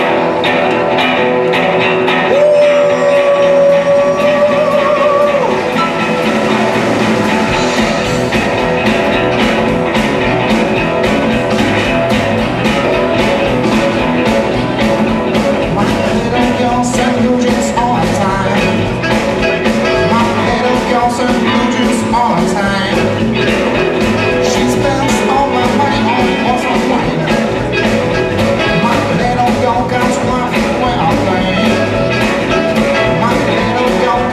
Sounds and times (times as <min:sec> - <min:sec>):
Blues: 0:00.0 - 0:34.3.